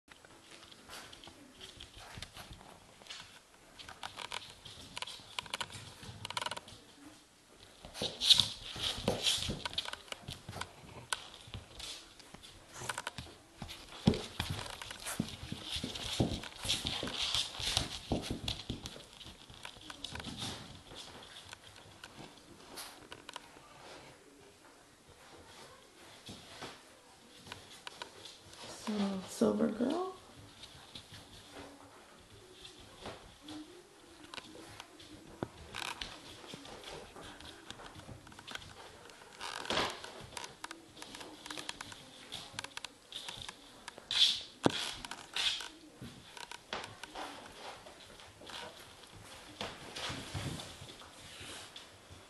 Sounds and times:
Inside, small room: 0.0 - 52.2.

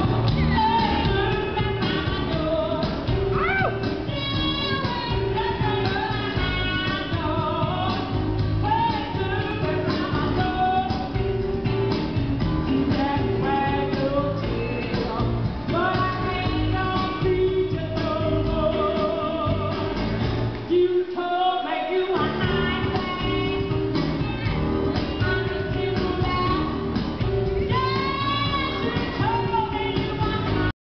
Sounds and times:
Music: 0.0 - 30.8.

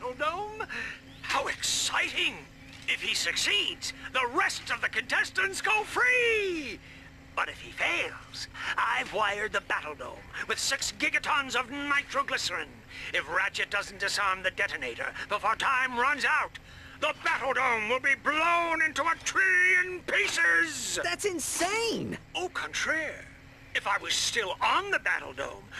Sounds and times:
Speech: 0.0 - 6.8, 7.4 - 25.7.

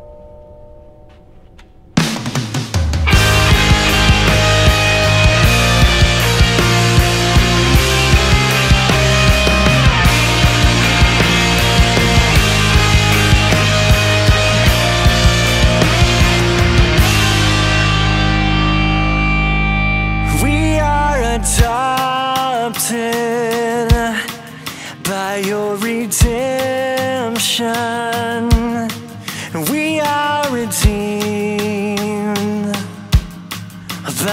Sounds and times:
Rhythm and blues: 1.1 - 34.3.

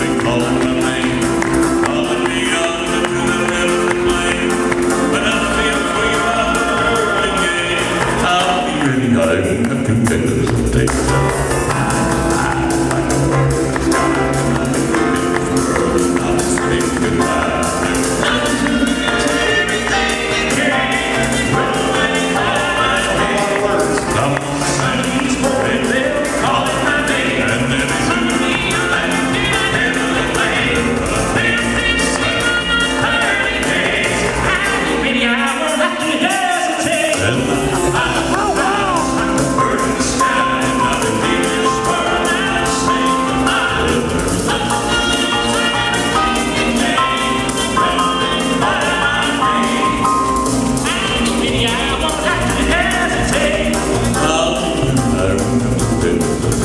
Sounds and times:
Choir: 0.0 - 9.4, 11.6 - 55.6
Classical music: 0.0 - 56.6
Gospel music: 0.0 - 56.6
Music of Latin America: 0.0 - 56.6.

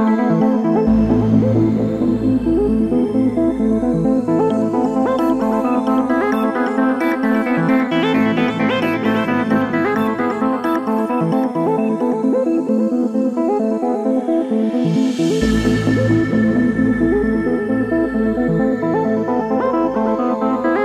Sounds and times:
Music: 0.0 - 20.8.

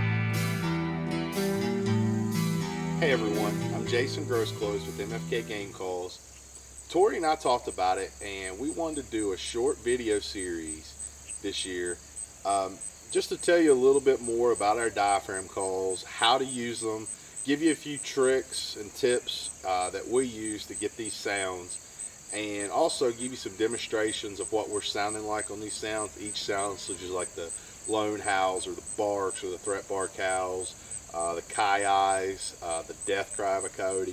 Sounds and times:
Speech: 3.0 - 6.2, 6.9 - 21.7, 22.3 - 34.1.

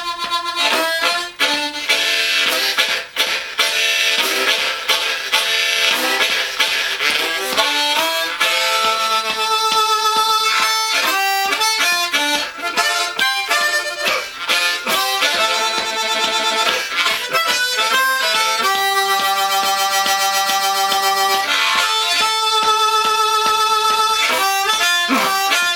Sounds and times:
Harmonica: 0.0 - 25.7
Wind instrument, woodwind instrument: 0.0 - 25.7.

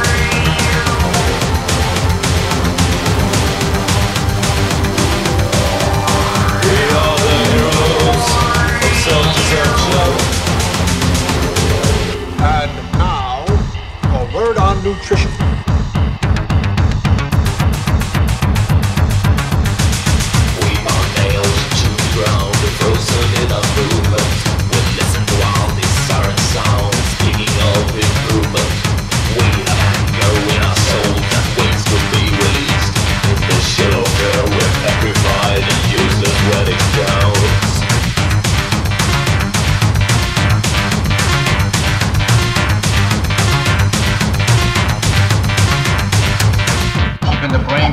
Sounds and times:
Angry music: 0.0 - 47.9.

